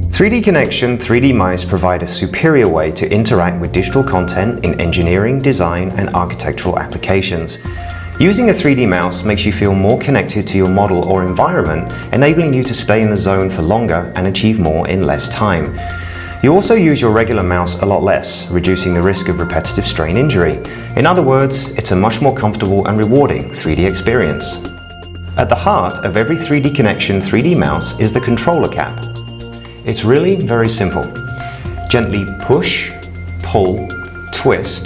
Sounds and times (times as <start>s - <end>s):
Music: 0.0s - 34.8s
Speech: 0.1s - 15.8s, 16.4s - 24.7s, 25.4s - 29.1s, 29.9s - 31.2s, 31.9s - 34.8s.